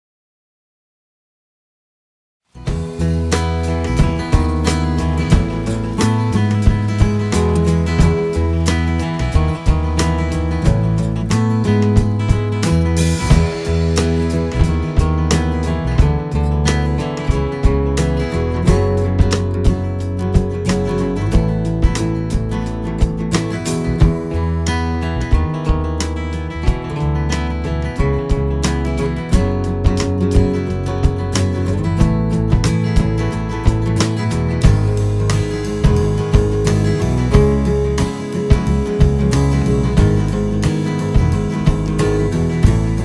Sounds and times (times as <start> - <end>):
Music: 2.5 - 43.0.